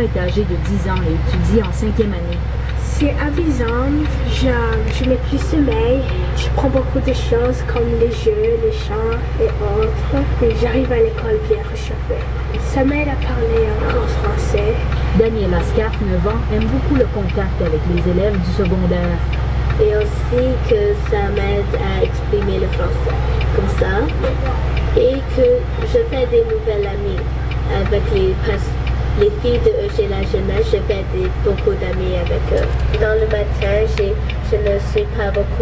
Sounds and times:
Speech: 0.0 - 19.2, 19.8 - 35.6
Truck: 0.0 - 35.6.

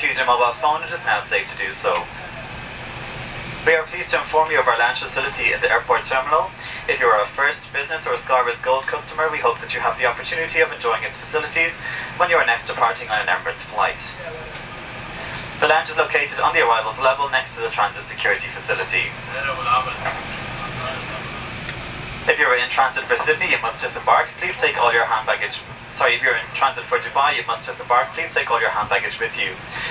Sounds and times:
Speech: 0.0 - 2.4, 3.6 - 14.6, 15.6 - 21.5, 22.3 - 29.9.

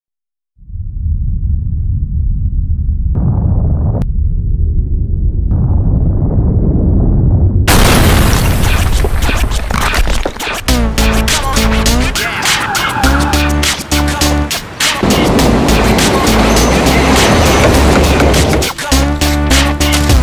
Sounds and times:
Boom: 0.6 - 9.4
Music: 8.7 - 20.2.

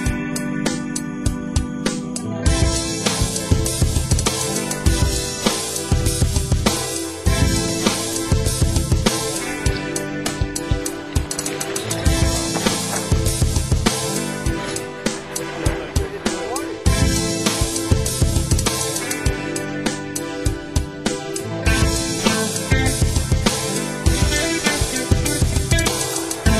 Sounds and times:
Music: 0.0 - 26.5
Speech: 15.5 - 16.9.

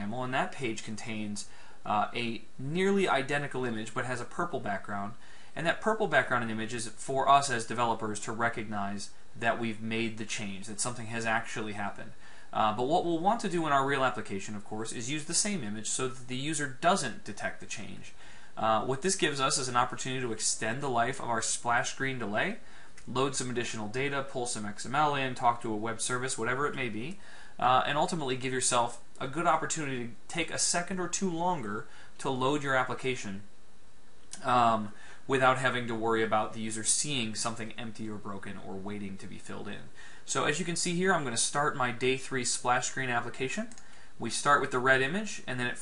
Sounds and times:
Speech: 0.0 - 33.5, 34.4 - 45.8.

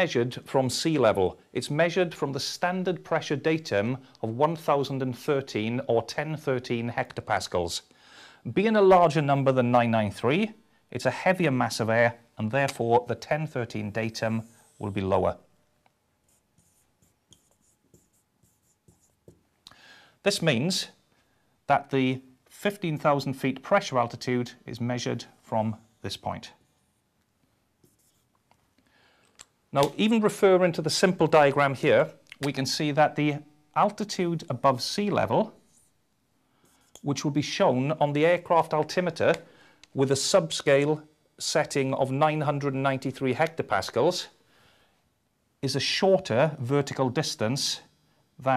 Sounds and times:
Speech: 0.0 - 7.9, 8.5 - 15.5, 20.2 - 21.0, 21.7 - 26.6, 29.7 - 35.6, 37.0 - 44.4, 45.6 - 48.5
Inside, small room: 0.0 - 48.5.

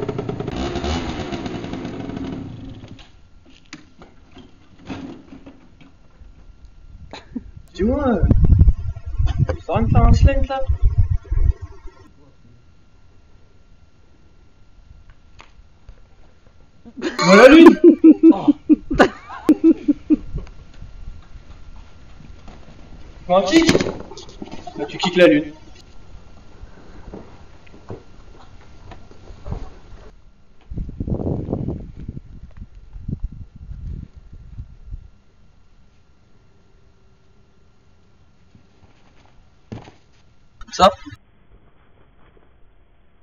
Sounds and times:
Speech: 9.6 - 10.7, 24.8 - 25.6.

